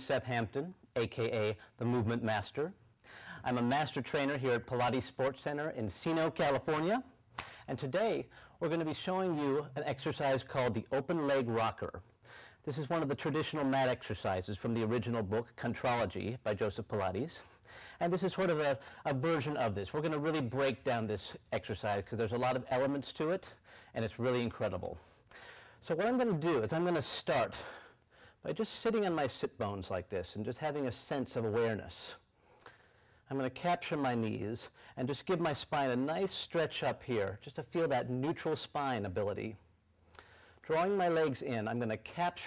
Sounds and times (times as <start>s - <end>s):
Speech: 0.0s - 2.8s, 3.4s - 12.0s, 12.6s - 25.0s, 25.8s - 32.2s, 33.3s - 39.6s, 40.6s - 42.4s.